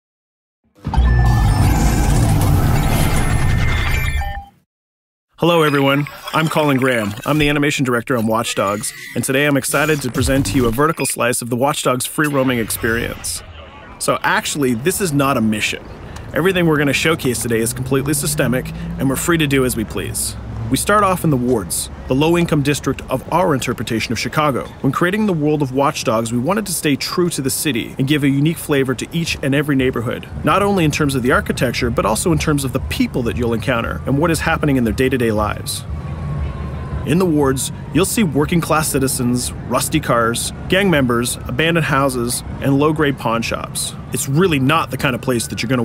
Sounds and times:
Speech: 0:05.4 - 0:35.9, 0:37.1 - 0:45.8.

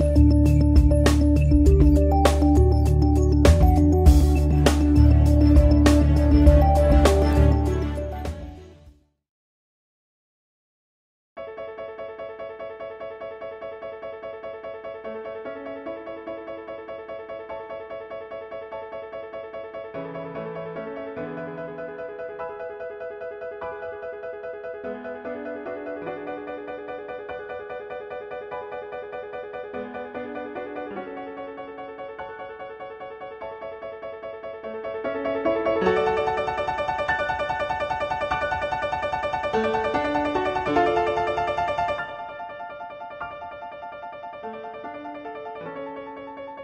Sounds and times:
Music: 0:00.0 - 0:09.2, 0:11.4 - 0:46.6.

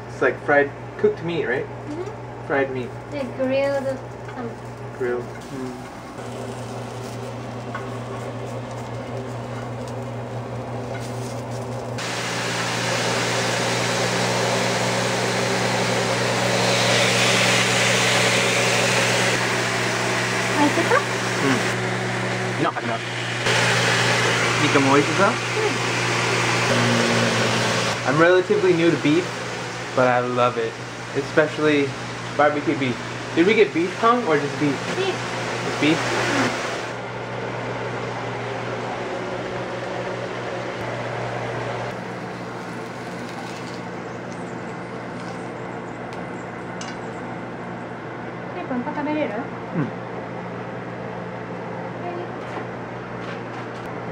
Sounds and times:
Speech: 0:30.0 - 0:36.5.

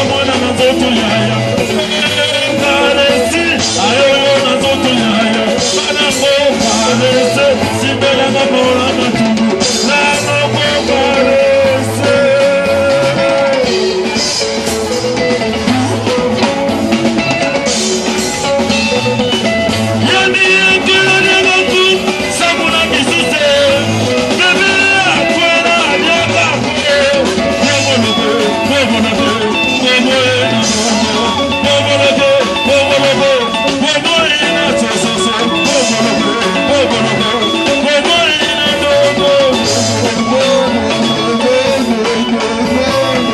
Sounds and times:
Dance music: 0:00.0 - 0:43.3
Exciting music: 0:00.0 - 0:43.3.

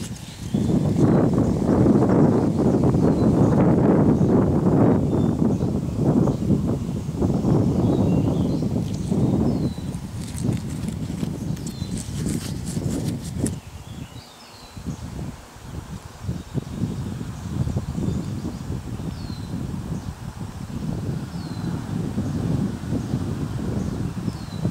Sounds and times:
Rustling leaves: 0:00.0 - 0:24.7.

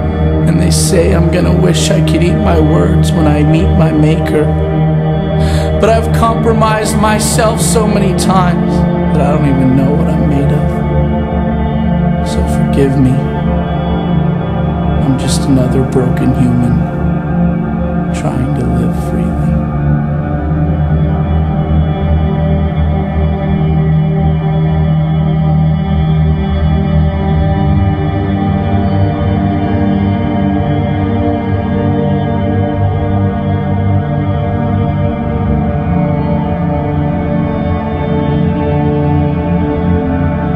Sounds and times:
Music: 0:00.0 - 0:40.5
Speech: 0:00.4 - 0:04.6, 0:05.4 - 0:10.8, 0:12.3 - 0:13.3, 0:15.0 - 0:16.9, 0:18.2 - 0:19.6.

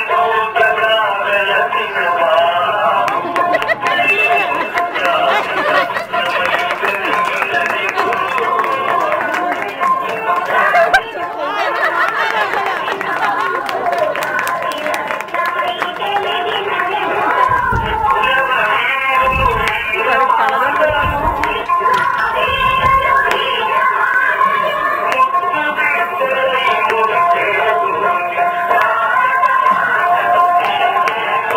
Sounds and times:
Inside, large room or hall: 0:00.0 - 0:31.5
Music: 0:00.0 - 0:31.5
Singing: 0:00.0 - 0:31.5.

